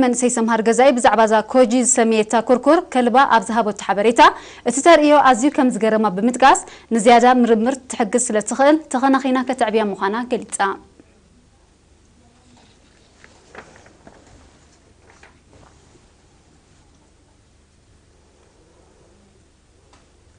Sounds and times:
Speech: 0.0s - 13.0s.

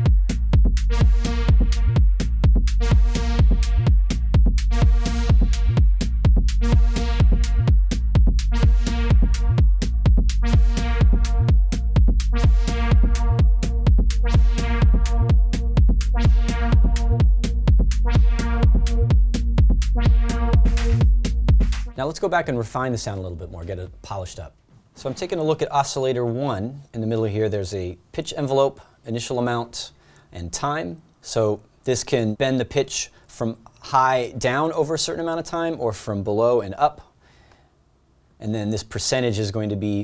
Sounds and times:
Speech: 22.0s - 37.1s, 38.4s - 40.0s.

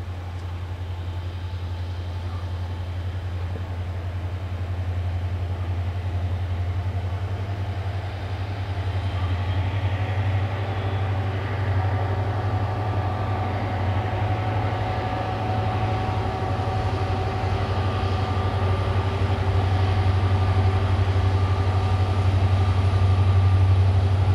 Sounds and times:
Rail transport: 0.0s - 24.3s.

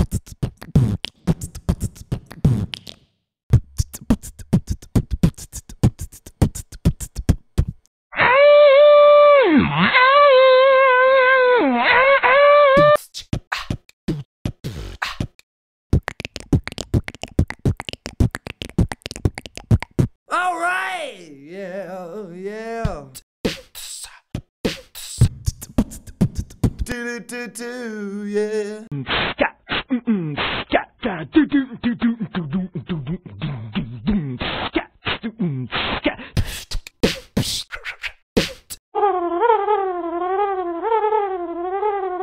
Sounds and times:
Beatboxing: 0.0s - 7.9s, 12.8s - 38.8s.

